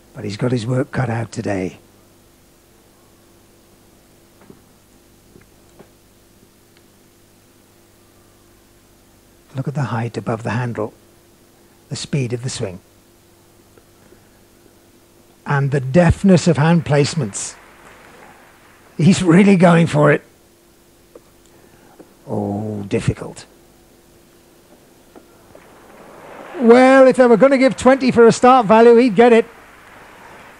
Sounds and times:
Speech: 0.1s - 1.8s, 9.5s - 11.0s, 11.9s - 12.9s, 15.4s - 17.6s, 19.0s - 20.3s, 22.2s - 23.5s, 26.6s - 29.5s.

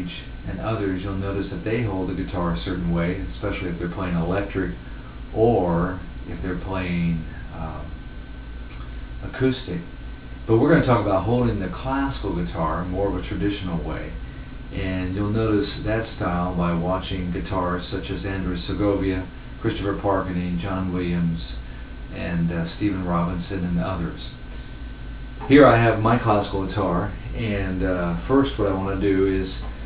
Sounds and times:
Speech: 0.0s - 8.0s, 9.2s - 9.9s, 10.5s - 24.4s, 25.4s - 29.7s.

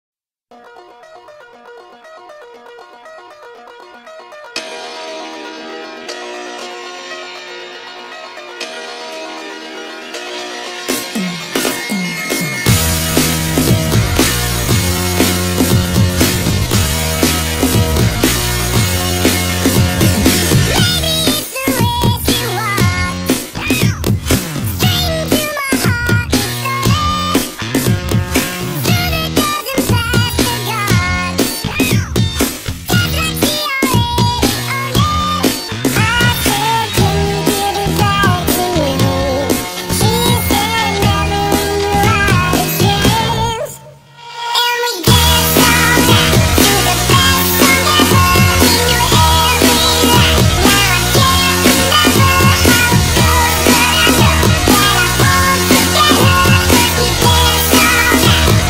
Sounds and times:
Music: 0.5s - 58.6s.

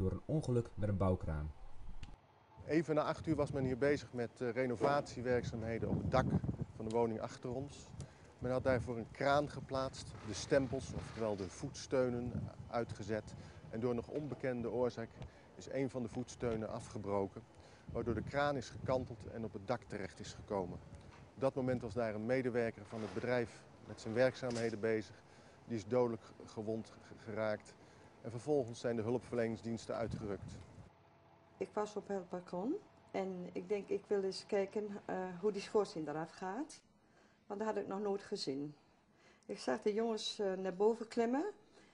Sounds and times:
Speech: 0.0s - 1.5s, 2.6s - 20.8s, 21.4s - 25.1s, 28.3s - 30.5s.

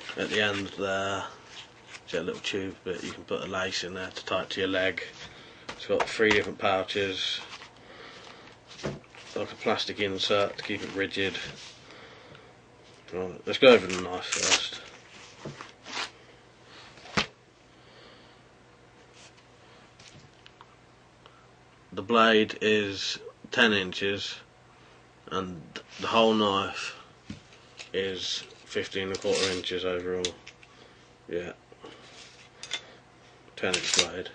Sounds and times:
Speech: 0.2s - 1.4s, 2.1s - 5.2s, 5.8s - 7.5s, 9.4s - 11.6s, 13.1s - 14.9s, 21.9s - 24.5s, 25.3s - 27.0s, 27.9s - 30.4s, 31.3s - 31.6s, 33.6s - 34.3s.

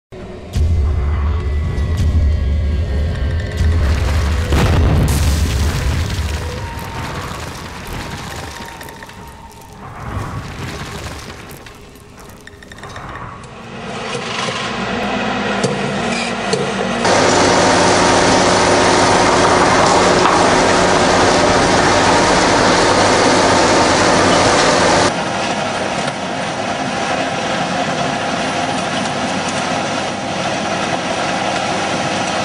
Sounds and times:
Music: 0.1s - 5.1s
Boom: 3.6s - 12.4s.

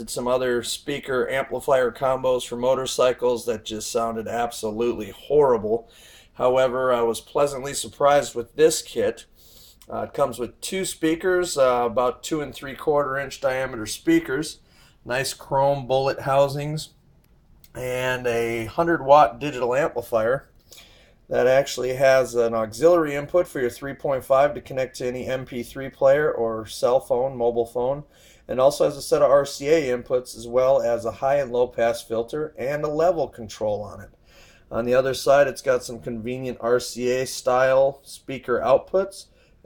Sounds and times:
Speech: 0.0s - 17.0s, 17.7s - 20.5s, 21.3s - 39.3s.

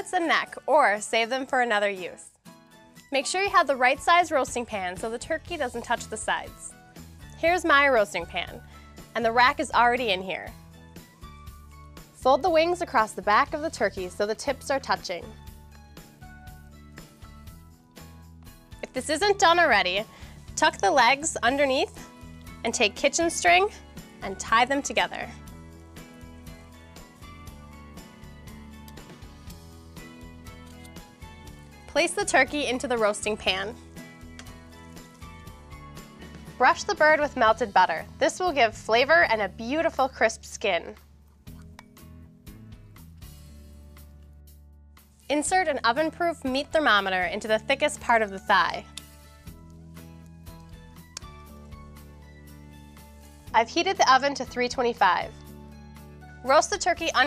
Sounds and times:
Speech: 0.0s - 2.3s, 3.1s - 6.7s, 7.4s - 8.6s, 9.2s - 10.5s, 12.2s - 15.3s, 18.8s - 20.0s, 20.6s - 22.0s, 22.7s - 25.4s, 32.0s - 33.8s, 36.6s - 41.0s, 45.3s - 48.9s, 53.6s - 55.3s, 56.5s - 57.2s
Music: 0.0s - 57.2s.

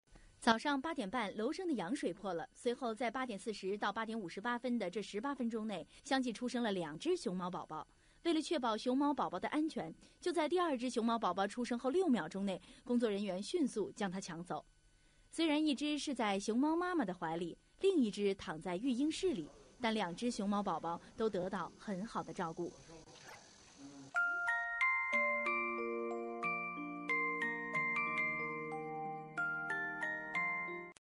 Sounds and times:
Speech: 0.5s - 14.6s, 15.4s - 24.2s.

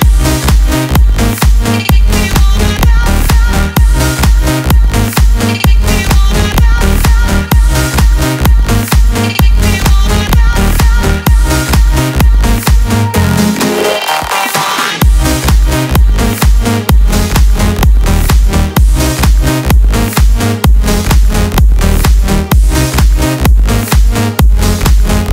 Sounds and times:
Music: 0.0s - 25.3s.

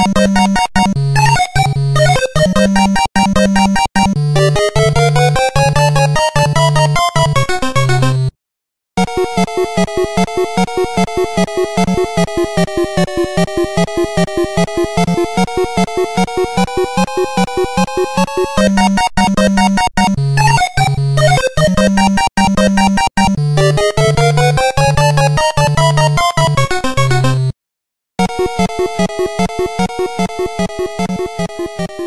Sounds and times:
Video game music: 0.0s - 8.3s, 9.0s - 27.6s, 28.2s - 32.0s.

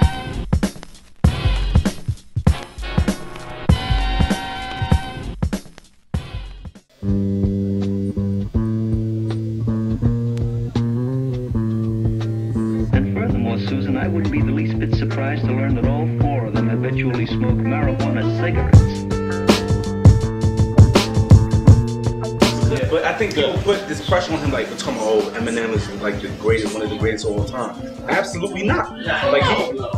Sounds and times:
Bass guitar: 1.3s - 5.6s, 6.2s - 23.1s.

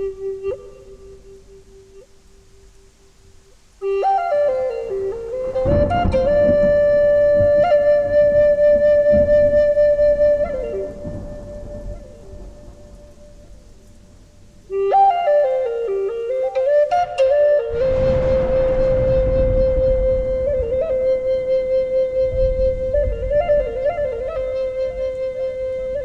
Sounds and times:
Flute: 0.0s - 26.0s.

